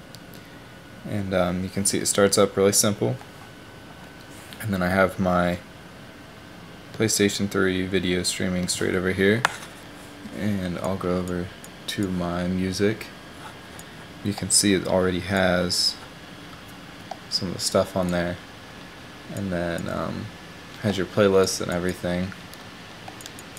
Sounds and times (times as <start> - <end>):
Speech: 1.0 - 3.2, 4.6 - 5.6, 7.0 - 9.5, 10.3 - 13.2, 14.2 - 16.1, 17.3 - 18.4, 19.3 - 22.4.